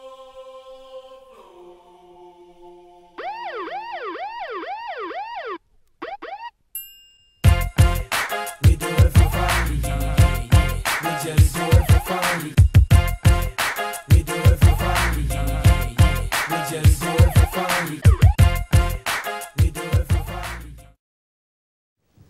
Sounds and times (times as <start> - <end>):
Ambulance (siren): 3.2 - 6.5.